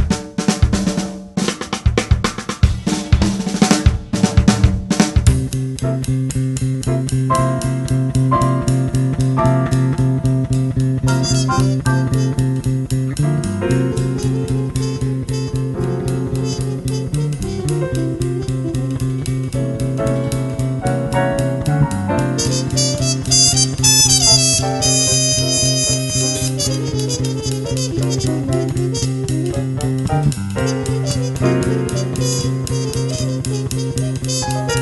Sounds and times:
Jazz: 0.0 - 34.8.

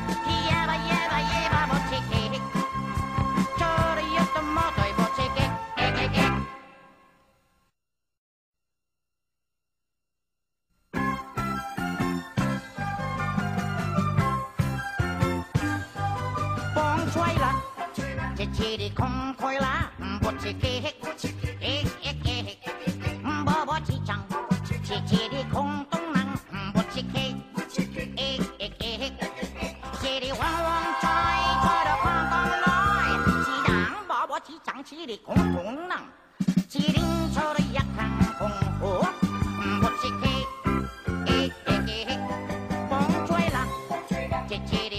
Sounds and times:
Music: 0.0 - 7.7, 10.8 - 44.9.

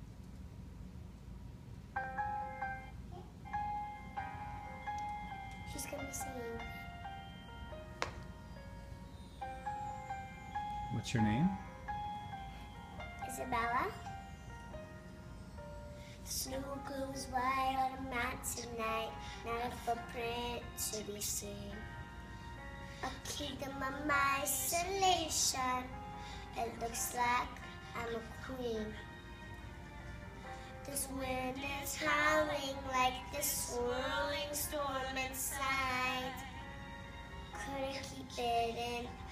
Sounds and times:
Child singing: 5.7 - 6.8, 13.2 - 14.1, 16.3 - 21.9, 23.0 - 29.1, 30.8 - 36.6, 37.5 - 39.3.

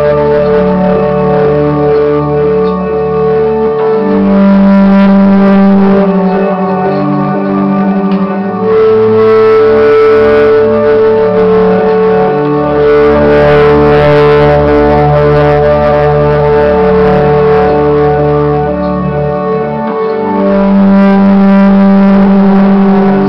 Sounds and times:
Echo: 0.0 - 23.2
Music: 0.0 - 23.2.

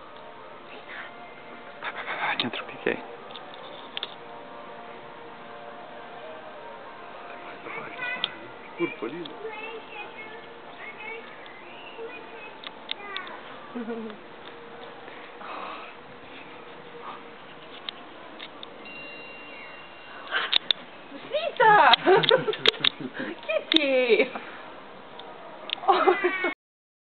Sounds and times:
Caterwaul: 25.8 - 26.6
Meow: 25.9 - 26.6.

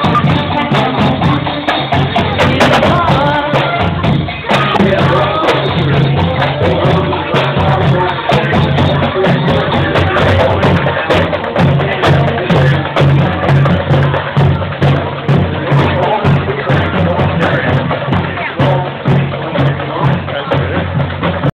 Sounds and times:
Music: 0.0 - 21.5
Speech: 0.0 - 21.5.

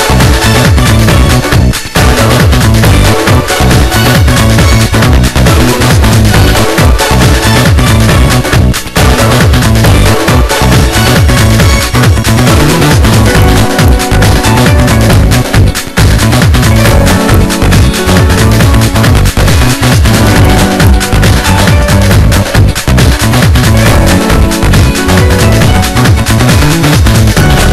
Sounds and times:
Soundtrack music: 0.0 - 27.7.

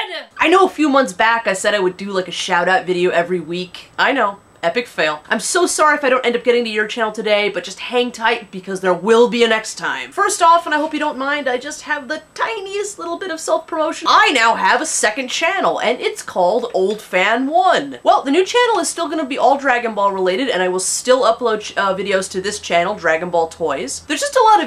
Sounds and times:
Speech: 0.0 - 24.6.

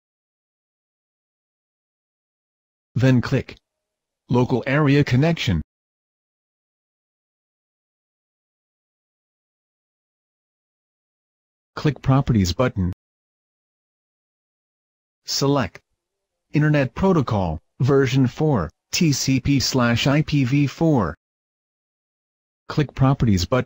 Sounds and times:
Speech synthesizer: 3.0 - 3.6, 4.3 - 5.7, 11.8 - 13.0, 15.3 - 15.8, 16.6 - 21.2, 22.7 - 23.6.

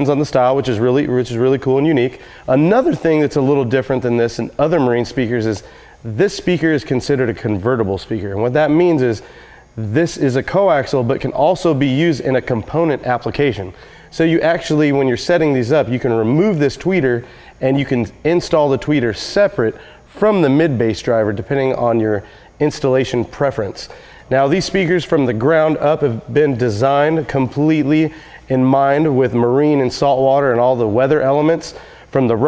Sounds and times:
Speech: 0.0 - 9.2, 9.8 - 32.4.

